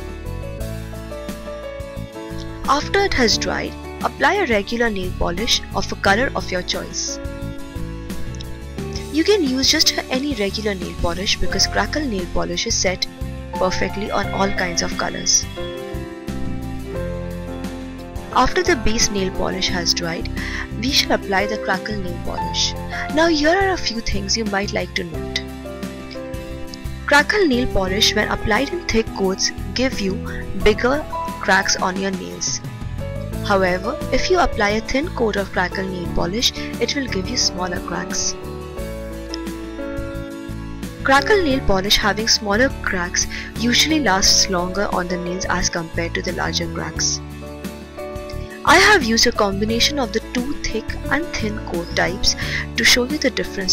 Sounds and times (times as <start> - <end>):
Music: 0.0 - 53.7
Speech: 2.7 - 7.2, 9.0 - 15.5, 18.4 - 25.4, 27.1 - 32.6, 33.5 - 38.4, 41.1 - 47.2, 48.7 - 53.7.